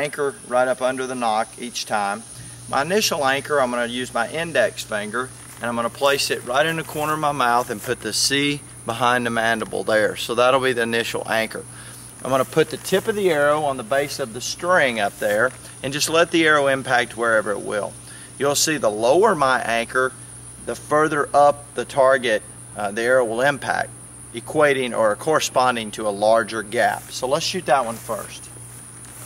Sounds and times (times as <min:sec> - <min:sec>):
Speech: 0:00.0 - 0:28.5.